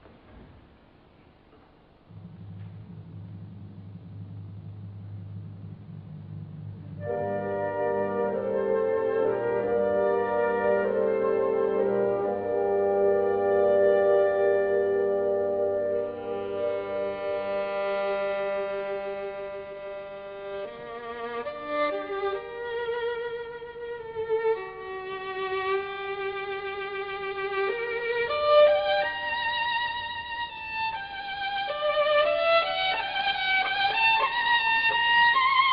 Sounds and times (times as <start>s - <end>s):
Violin, fiddle: 15.1s - 35.7s.